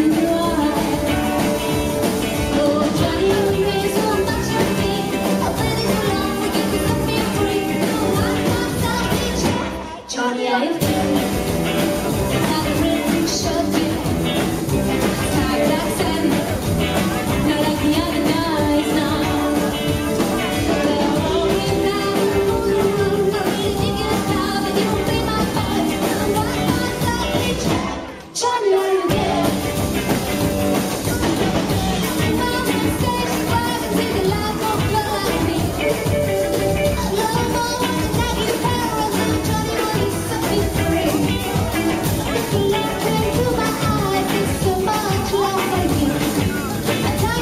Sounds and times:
Music: 0.0 - 47.4.

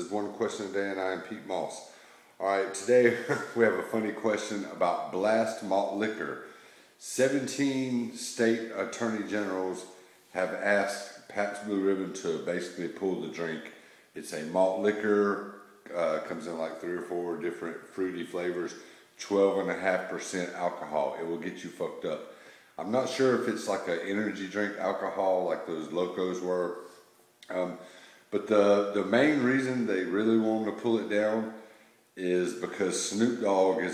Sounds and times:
Speech: 0.0 - 33.9.

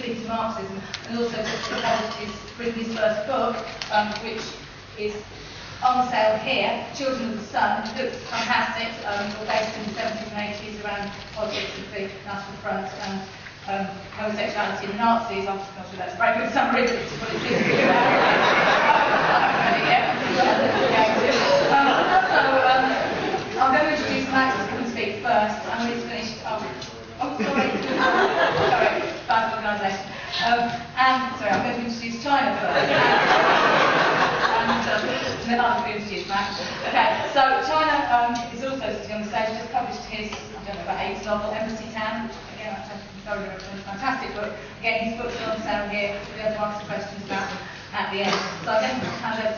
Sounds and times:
Speech: 0.0 - 5.2, 5.8 - 17.8, 19.3 - 28.0, 28.6 - 32.8, 34.8 - 49.5.

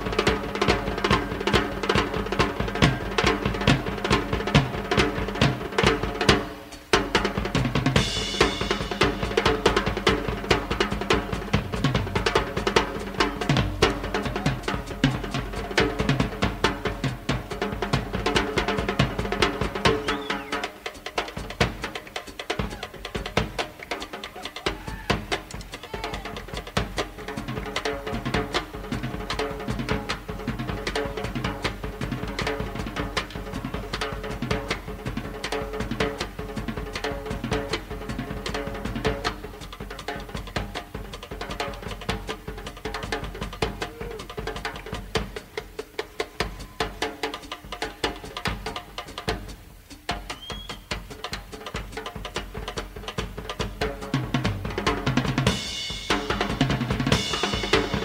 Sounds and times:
Cymbal: 0.0 - 58.0.

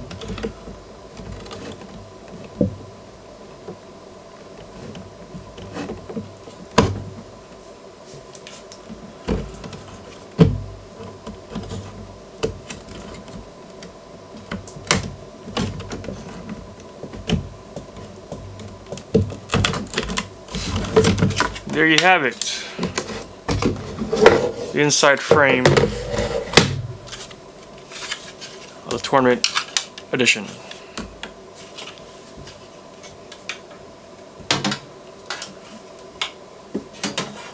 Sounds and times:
Speech: 21.7 - 22.8, 24.7 - 25.8, 28.8 - 29.5, 30.1 - 30.6.

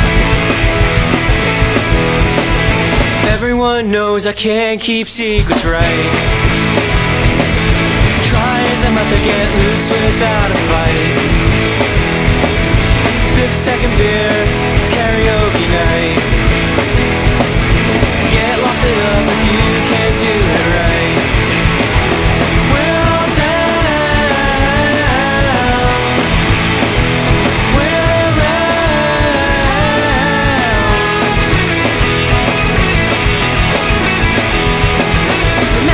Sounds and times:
Rhythm and blues: 0.0 - 35.9.

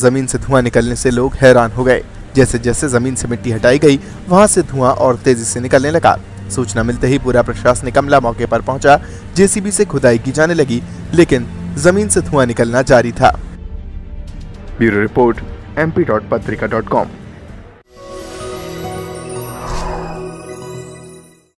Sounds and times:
Speech: 0.0 - 13.4, 14.8 - 17.1
Music: 0.0 - 21.5.

